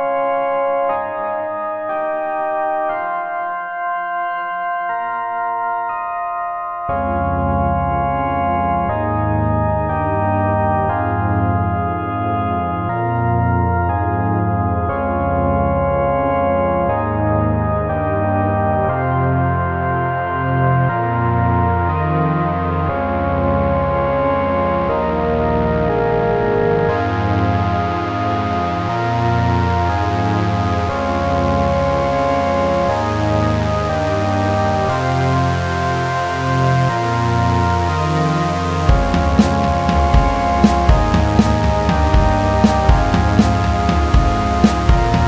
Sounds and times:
Tender music: 0.0s - 45.2s
Electronic music: 5.1s - 45.2s.

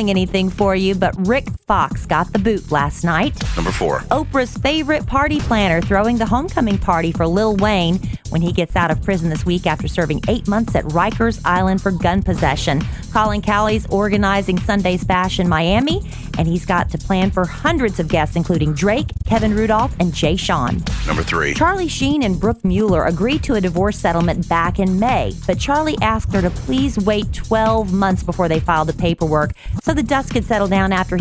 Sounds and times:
Music: 0.0s - 31.2s
Speech: 0.0s - 31.2s.

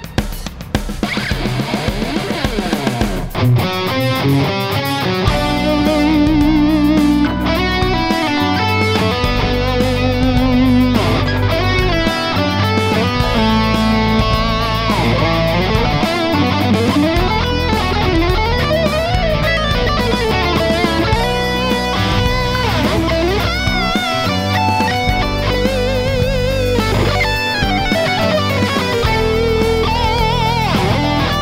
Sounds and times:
Bass guitar: 0.0s - 31.4s
Strum: 0.0s - 31.4s.

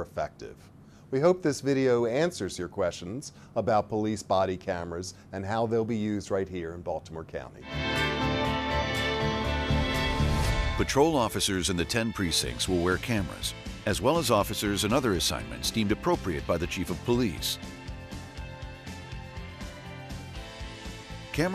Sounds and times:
Speech: 0.0s - 7.6s, 10.8s - 17.6s
Music: 7.6s - 21.5s.

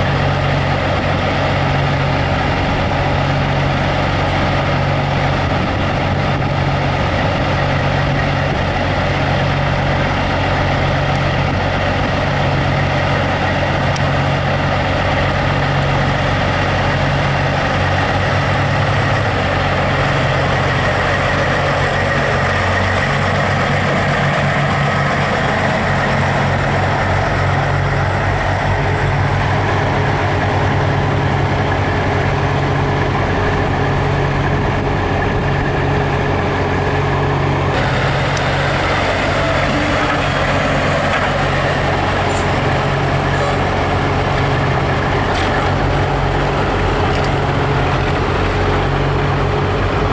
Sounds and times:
Truck: 0.0s - 50.1s.

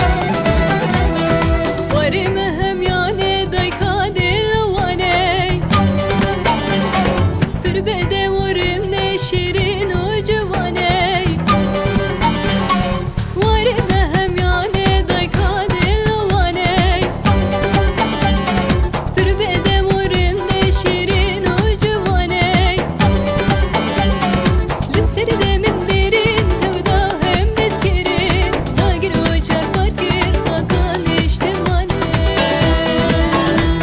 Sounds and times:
Music of Bollywood: 0.0s - 33.8s.

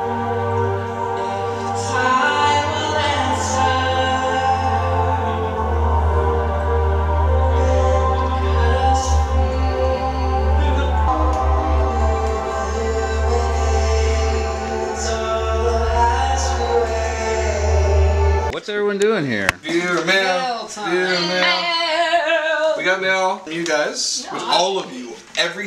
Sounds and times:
Music: 0.0s - 18.5s
Speech: 22.8s - 25.6s.

